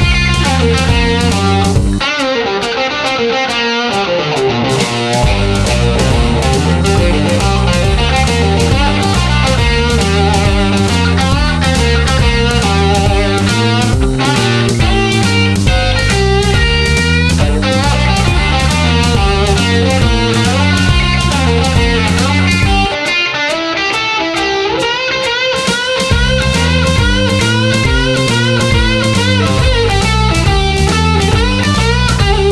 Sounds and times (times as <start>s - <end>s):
Electric guitar: 0.0s - 32.5s
Strum: 0.0s - 32.5s.